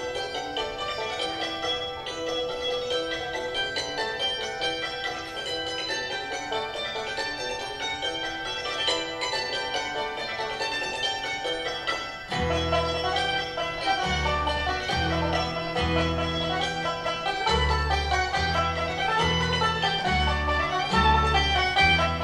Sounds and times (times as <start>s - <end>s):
Banjo: 0.0s - 22.2s
Guitar: 0.0s - 22.2s
Traditional music: 0.0s - 22.2s
Violin, fiddle: 0.0s - 22.2s.